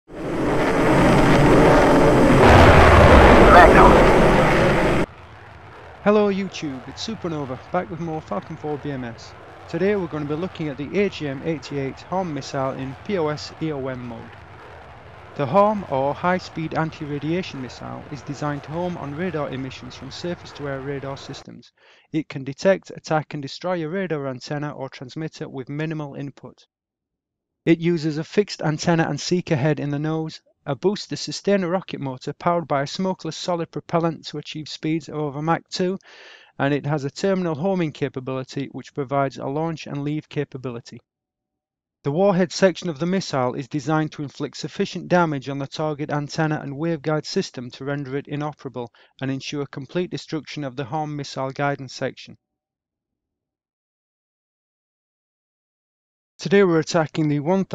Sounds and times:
Fixed-wing aircraft, airplane: 0:00.1 - 0:05.0.

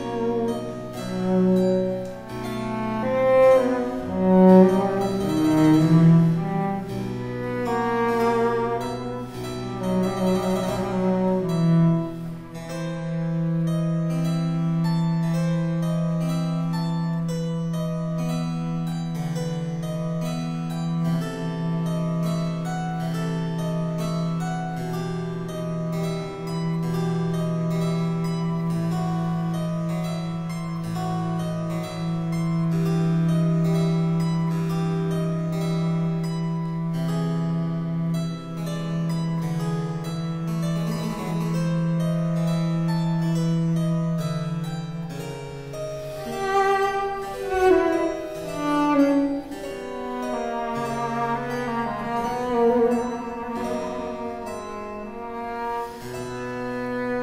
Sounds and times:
Harpsichord: 0:00.0 - 0:57.2.

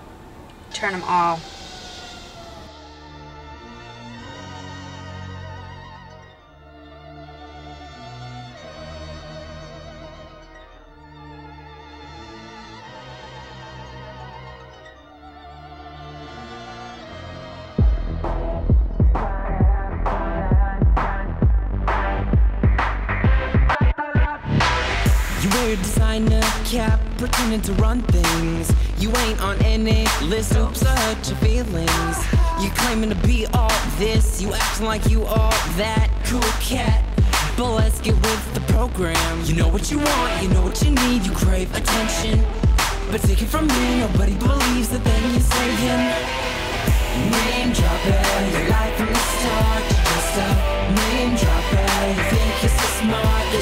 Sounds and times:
Background music: 0:00.7 - 0:53.6
Dance music: 0:00.8 - 0:05.3, 0:16.1 - 0:53.6
Theme music: 0:00.8 - 0:23.8, 0:24.4 - 0:53.6.

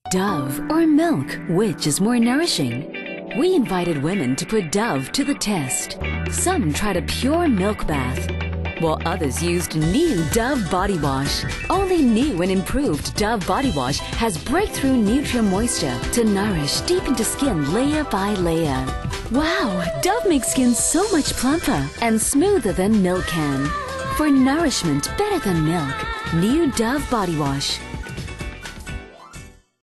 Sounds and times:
Speech: 0:00.1 - 0:02.8, 0:03.4 - 0:27.8
Music: 0:00.1 - 0:29.8.

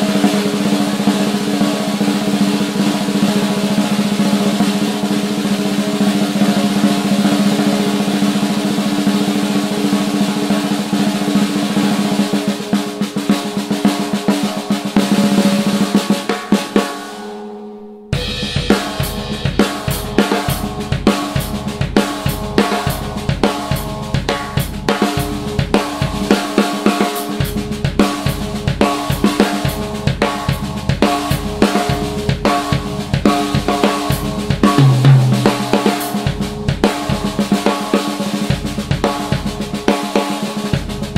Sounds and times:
Music: 0:00.0 - 0:41.1.

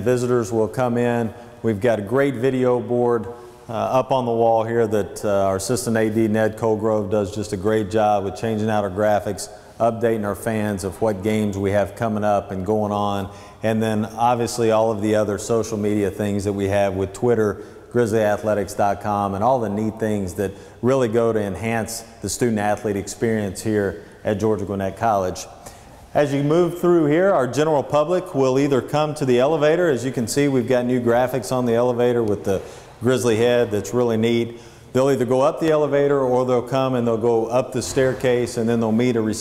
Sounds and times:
Speech: 0:00.0 - 0:39.4.

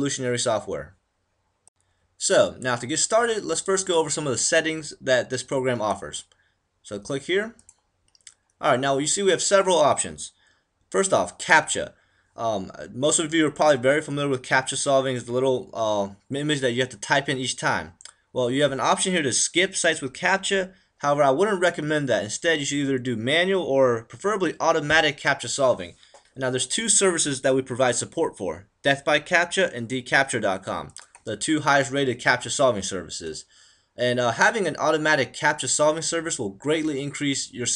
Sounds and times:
Speech: 0:00.0 - 0:01.0, 0:02.2 - 0:07.7, 0:08.3 - 0:37.7.

